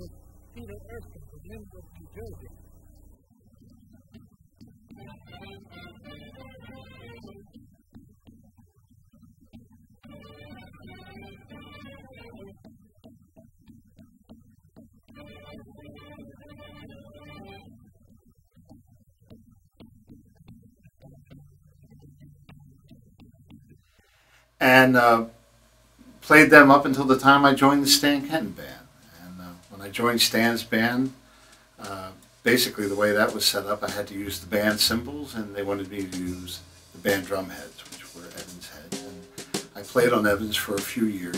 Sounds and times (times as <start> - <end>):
Bass drum: 0.0 - 8.6, 26.1 - 41.3
Drum kit: 4.6 - 8.4, 9.5 - 13.2, 24.6 - 25.4, 26.0 - 41.3.